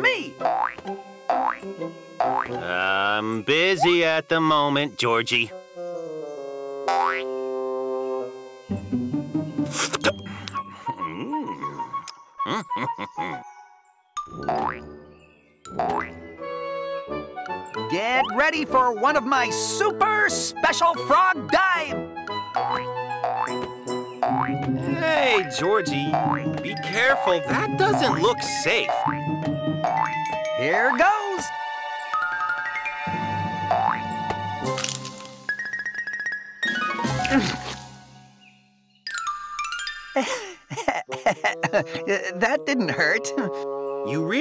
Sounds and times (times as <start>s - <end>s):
Music for children: 8.7s - 11.2s, 12.0s - 44.4s.